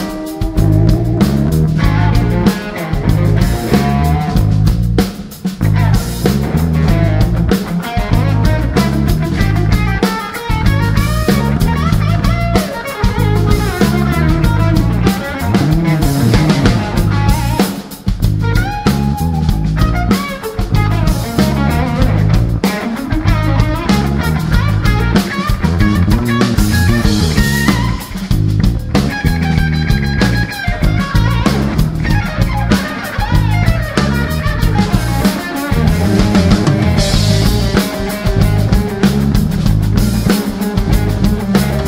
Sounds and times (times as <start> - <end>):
Strum: 0.0 - 5.0, 5.6 - 41.8
Bass guitar: 0.0 - 41.8
Electric guitar: 0.0 - 41.8.